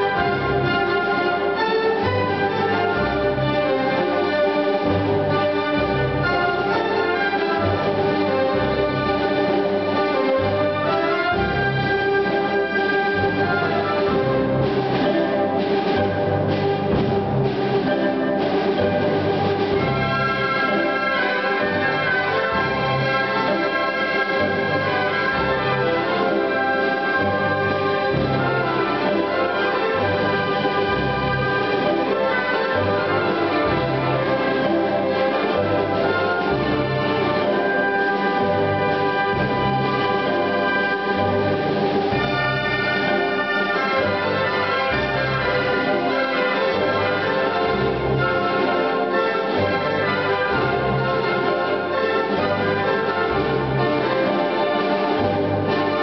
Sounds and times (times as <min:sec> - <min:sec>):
Orchestra: 0:00.0 - 0:56.0.